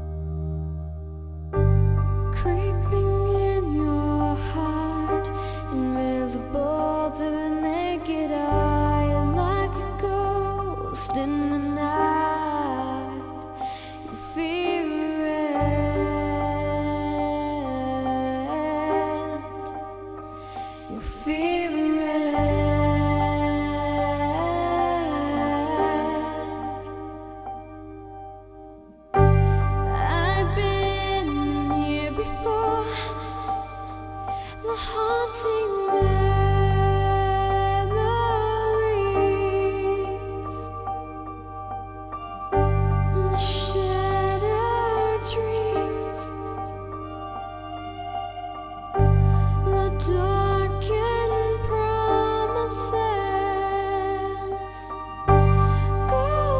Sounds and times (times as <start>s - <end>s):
Music: 0.0s - 56.5s.